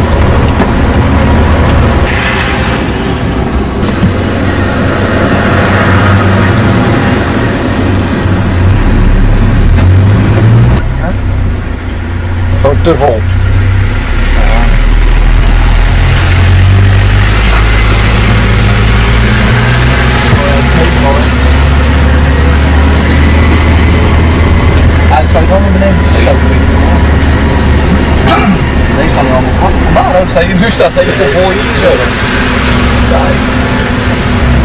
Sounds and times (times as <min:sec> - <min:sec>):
Speech: 0:10.9 - 0:11.2, 0:12.5 - 0:13.2, 0:20.3 - 0:21.3, 0:25.1 - 0:27.1, 0:28.9 - 0:32.1, 0:33.1 - 0:33.4.